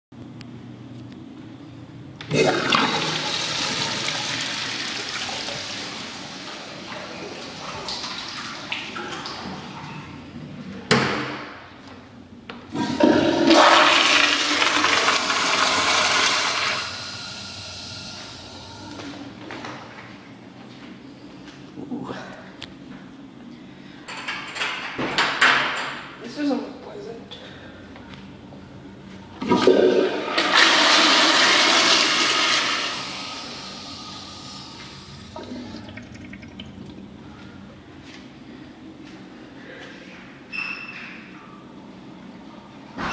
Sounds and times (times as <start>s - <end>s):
Toilet flush: 2.3s - 10.2s, 12.7s - 19.2s, 29.4s - 37.2s
Water: 2.8s - 10.2s, 35.3s - 37.3s.